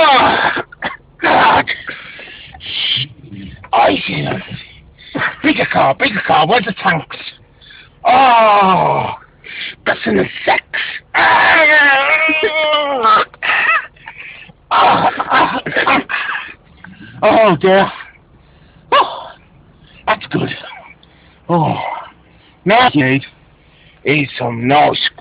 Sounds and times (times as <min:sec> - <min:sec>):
Outside, urban or manmade: 0:00.0 - 0:25.2
Speech: 0:02.7 - 0:07.4, 0:17.1 - 0:18.1, 0:20.1 - 0:20.8, 0:22.6 - 0:23.4, 0:24.0 - 0:25.2.